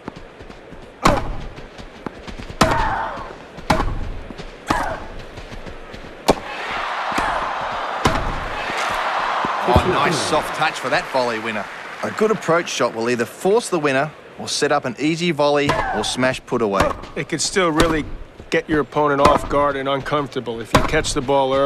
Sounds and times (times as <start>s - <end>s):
Speech: 9.6s - 21.6s.